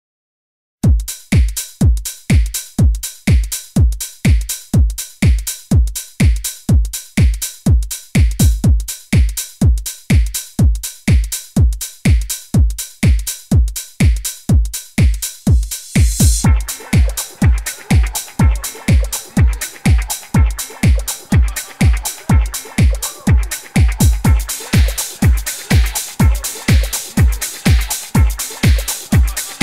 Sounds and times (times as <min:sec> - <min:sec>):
Drum machine: 0:00.8 - 0:29.6.